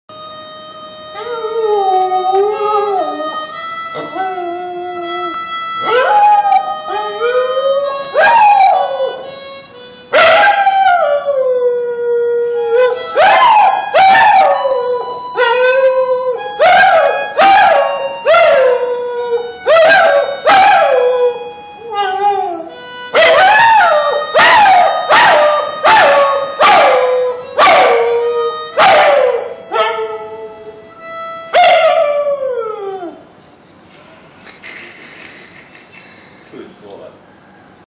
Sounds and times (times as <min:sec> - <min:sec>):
Music: 0:00.1 - 0:11.3, 0:12.4 - 0:31.8
Speech: 0:36.5 - 0:37.2.